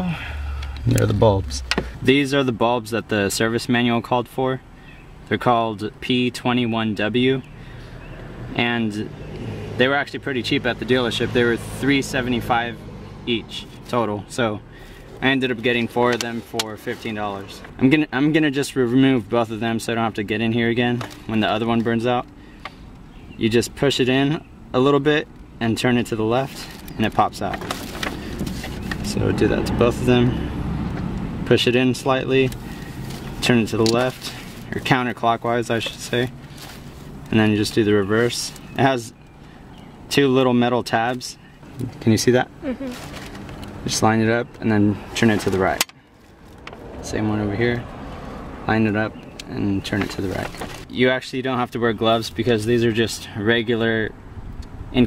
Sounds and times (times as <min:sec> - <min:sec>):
Speech: 0:00.8 - 0:04.6, 0:05.3 - 0:07.5, 0:08.6 - 0:09.1, 0:09.8 - 0:14.6, 0:15.2 - 0:22.3, 0:23.4 - 0:27.7, 0:29.0 - 0:30.4, 0:31.5 - 0:32.6, 0:33.4 - 0:36.3, 0:37.3 - 0:39.2, 0:40.1 - 0:43.0, 0:43.8 - 0:45.8, 0:47.0 - 0:47.8, 0:48.7 - 0:54.1.